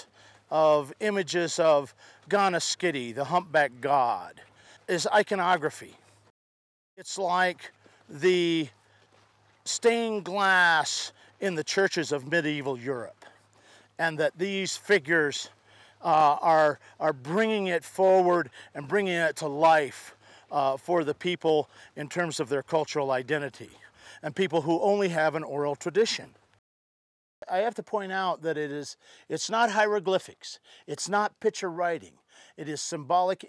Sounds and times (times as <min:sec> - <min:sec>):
Speech: 0:00.0 - 0:06.0, 0:07.0 - 0:08.7, 0:09.7 - 0:13.3, 0:14.0 - 0:26.4, 0:27.4 - 0:33.4.